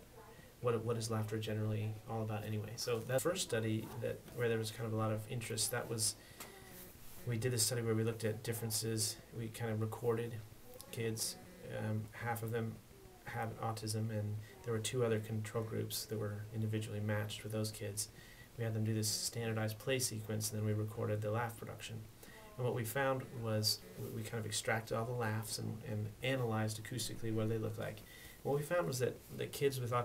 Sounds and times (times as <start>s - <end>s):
Speech: 0.1s - 6.2s, 7.2s - 30.0s.